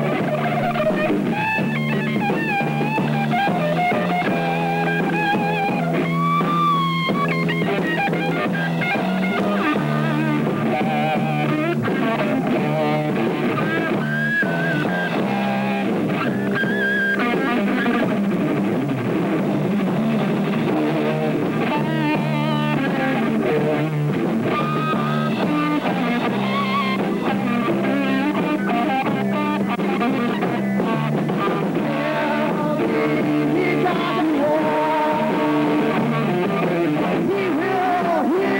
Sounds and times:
Heavy metal: 0.0 - 38.5.

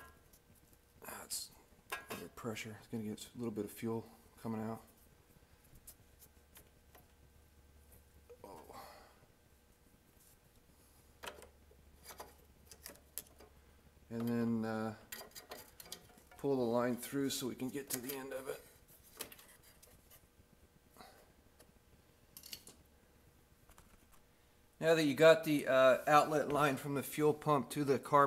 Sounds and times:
Inside, small room: 0.0 - 28.2
Speech: 1.0 - 4.9, 14.1 - 15.0, 16.4 - 18.7, 24.8 - 28.2.

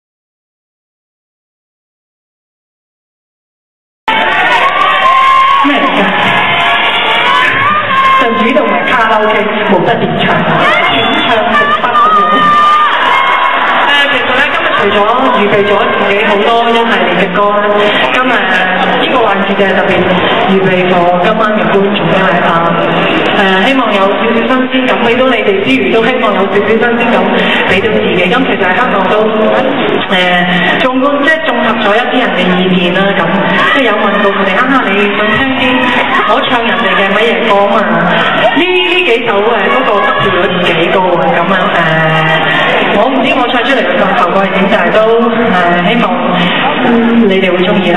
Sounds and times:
Speech: 7.9 - 12.7, 13.9 - 47.9.

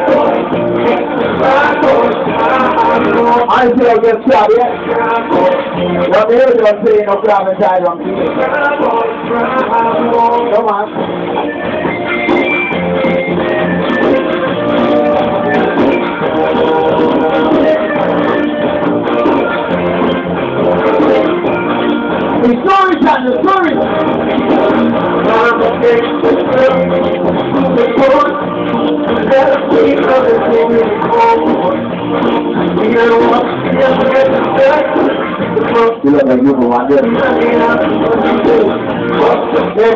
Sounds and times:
Music: 0.0 - 39.9
Speech: 6.1 - 8.3, 22.4 - 23.8, 36.0 - 37.1.

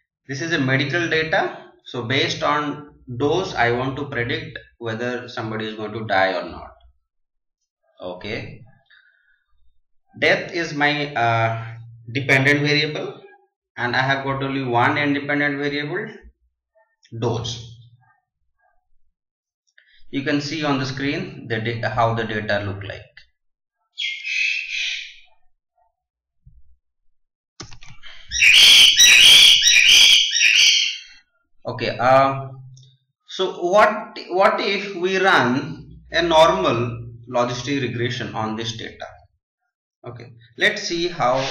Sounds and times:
Speech: 0.3 - 6.8, 8.0 - 8.7, 10.2 - 16.3, 17.1 - 17.7, 20.1 - 23.2, 31.7 - 32.6, 33.3 - 39.2, 40.1 - 41.5.

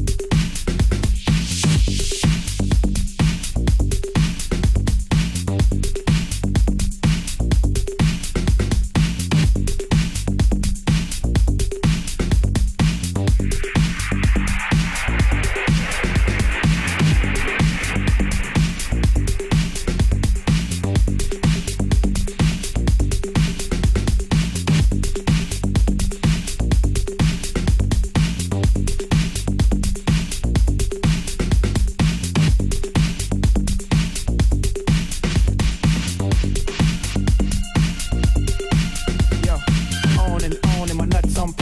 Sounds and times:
Disco: 0.0 - 41.6.

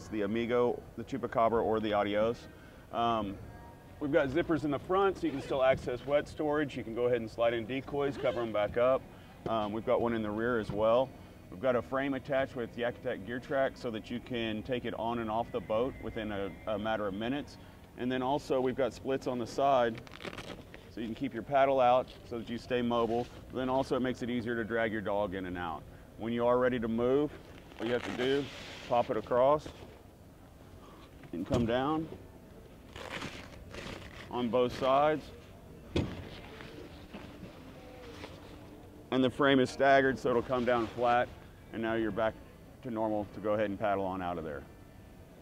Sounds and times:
Speech: 0.0 - 20.0, 20.9 - 29.8, 31.3 - 32.2, 34.3 - 35.3, 39.1 - 44.7.

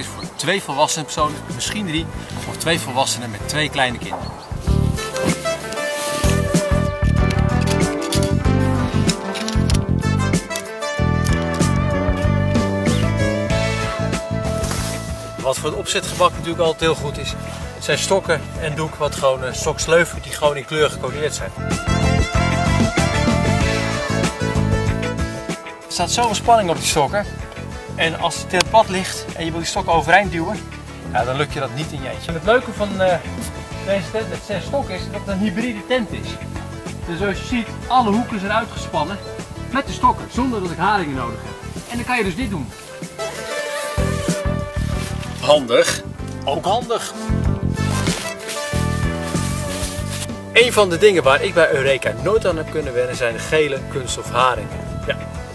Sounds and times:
Speech: 0.0 - 4.3, 15.4 - 21.6, 25.9 - 27.3, 28.0 - 36.4, 37.0 - 42.8, 45.4 - 47.2, 50.6 - 54.8
Music: 0.0 - 55.5.

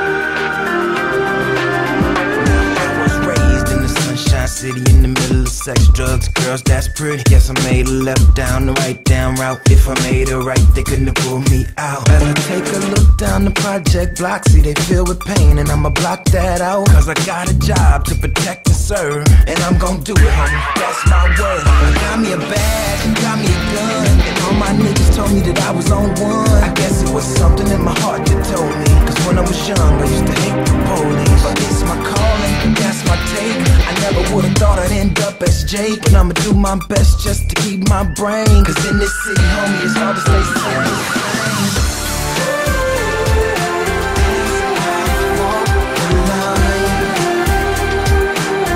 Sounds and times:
Exciting music: 0.0 - 48.7.

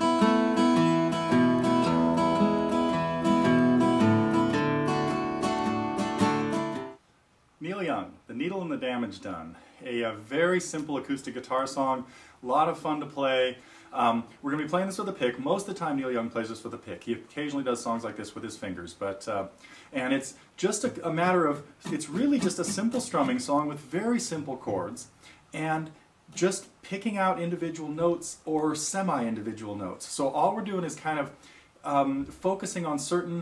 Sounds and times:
Acoustic guitar: 0.0 - 7.0, 19.6 - 26.4
Strum: 0.0 - 7.0, 21.8 - 23.5
Speech: 7.6 - 33.4.

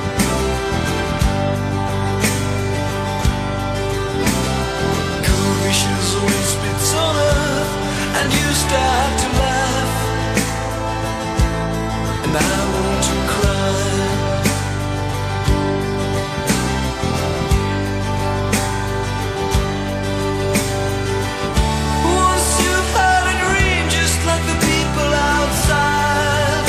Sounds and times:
Music: 0.0 - 26.6.

